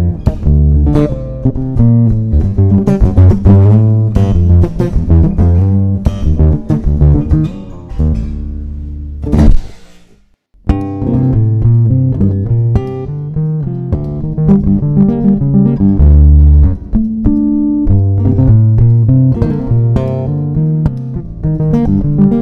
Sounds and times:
Bass guitar: 0.0s - 22.4s.

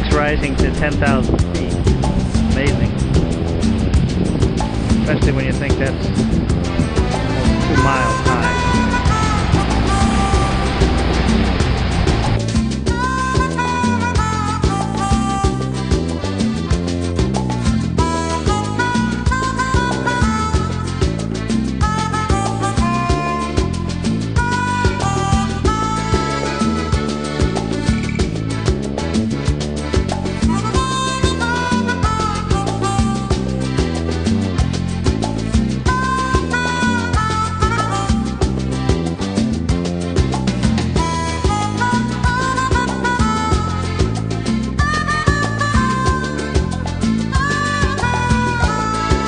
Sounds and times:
Salsa music: 0.0s - 49.2s.

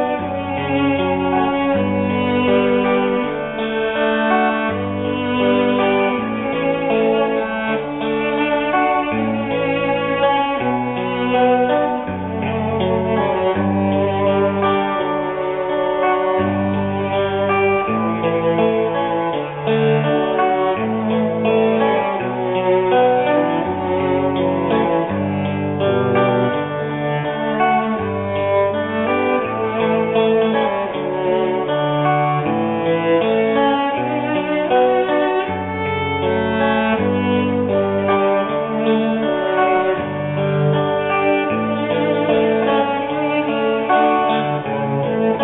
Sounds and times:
Double bass: 0.0s - 31.6s
Blues: 0.0s - 45.4s
Cello: 0.0s - 45.4s
Classical music: 0.0s - 45.4s
String section: 0.0s - 45.4s.

